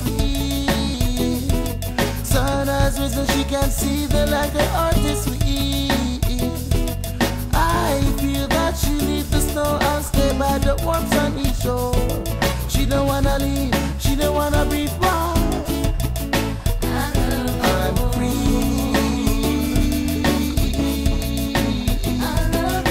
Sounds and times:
Soul music: 0.0 - 22.9.

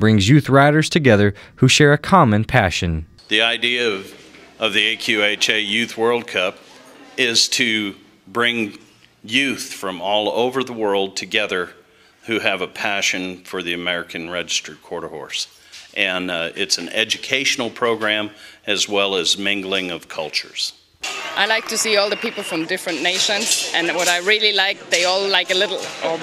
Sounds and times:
Speech: 0.0 - 6.6, 7.2 - 20.8, 21.4 - 26.2.

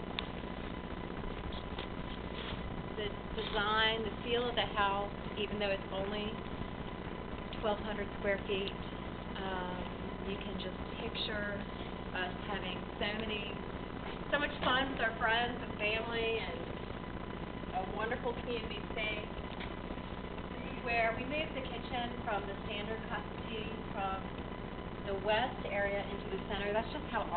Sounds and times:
Speech: 3.0 - 6.4, 7.6 - 8.8, 9.4 - 13.6, 14.3 - 16.7, 17.7 - 19.3, 20.6 - 24.3, 25.1 - 27.3.

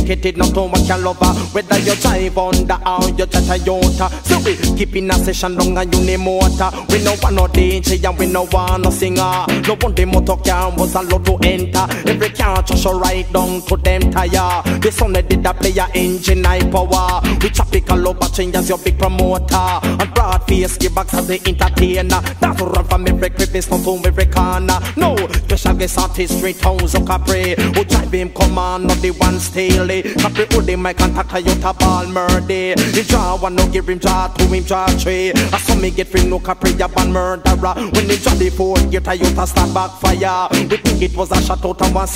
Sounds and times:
Music: 0.0 - 42.1.

